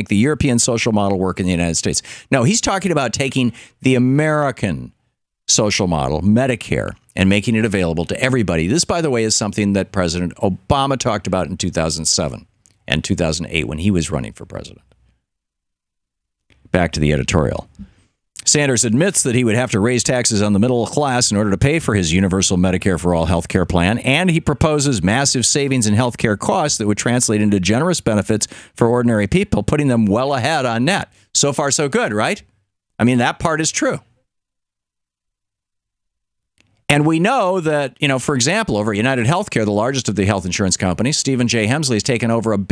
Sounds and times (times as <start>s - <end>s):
Speech: 0.0s - 14.9s, 16.6s - 34.2s, 36.9s - 42.7s.